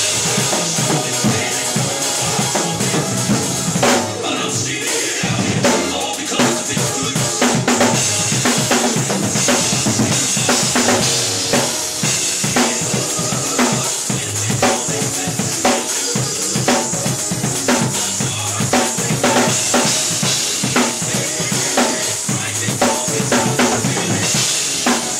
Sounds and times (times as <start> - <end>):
Bass drum: 0.0 - 4.2
Drum kit: 0.0 - 25.1
Drum roll: 0.0 - 25.1.